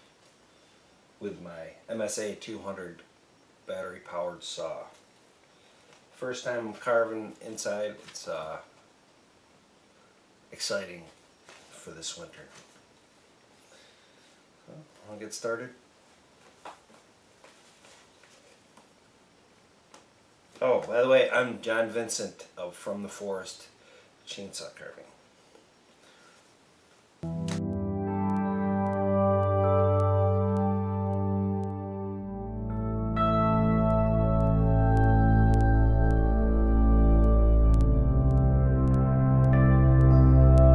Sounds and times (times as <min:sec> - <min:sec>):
Speech: 0:01.2 - 0:03.1, 0:03.7 - 0:05.0, 0:06.2 - 0:08.7, 0:10.5 - 0:12.6, 0:14.7 - 0:15.8, 0:20.6 - 0:25.2.